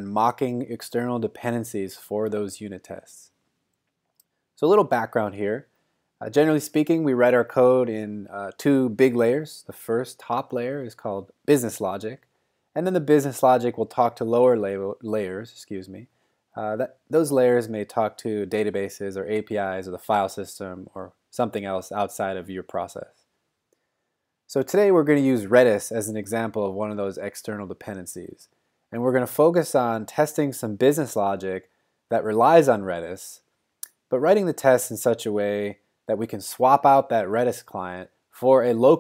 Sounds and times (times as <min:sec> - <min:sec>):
Speech: 0:00.0 - 0:03.4, 0:04.6 - 0:23.2, 0:24.5 - 0:39.0.